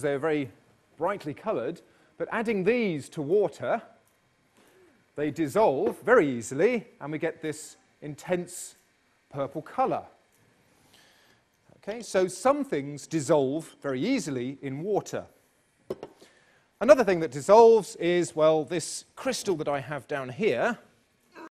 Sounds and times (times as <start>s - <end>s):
Speech: 0.0s - 4.0s, 5.2s - 10.2s, 11.8s - 15.3s, 16.8s - 21.5s.